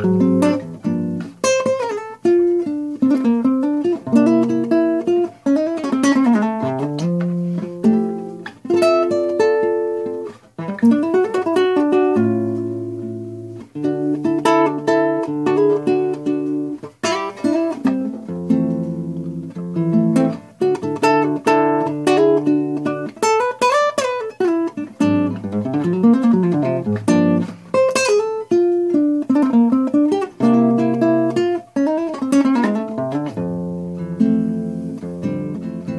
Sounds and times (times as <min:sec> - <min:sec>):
Acoustic guitar: 0:00.0 - 0:35.9
Strum: 0:00.0 - 0:35.9.